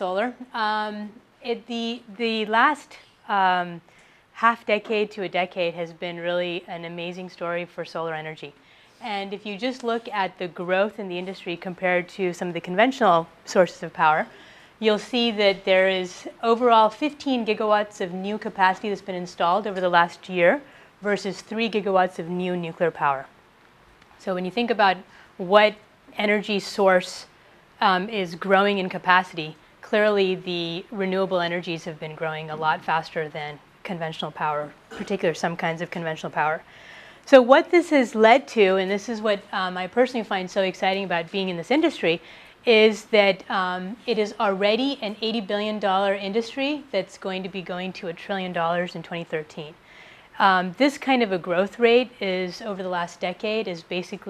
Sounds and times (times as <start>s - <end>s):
Speech: 0.0s - 23.3s, 24.2s - 36.7s, 37.3s - 49.8s, 50.4s - 54.3s.